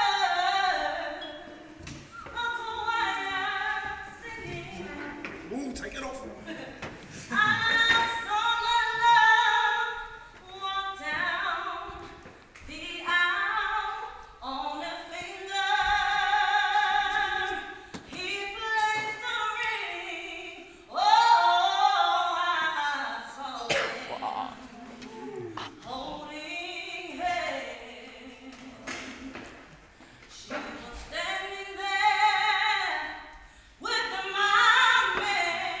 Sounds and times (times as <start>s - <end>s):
Female singing: 0.0s - 5.2s, 7.3s - 23.8s, 25.8s - 29.5s, 30.3s - 35.8s.